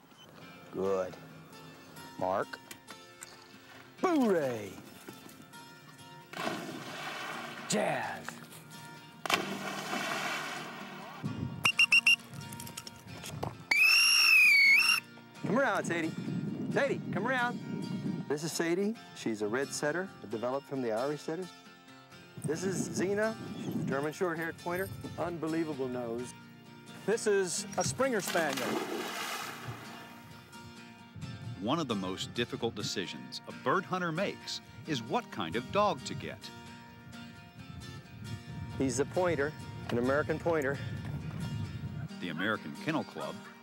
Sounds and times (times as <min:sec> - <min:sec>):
Music: 0:00.0 - 0:43.6
Speech: 0:04.0 - 0:04.8, 0:27.1 - 0:28.7, 0:31.6 - 0:36.5, 0:42.2 - 0:43.4.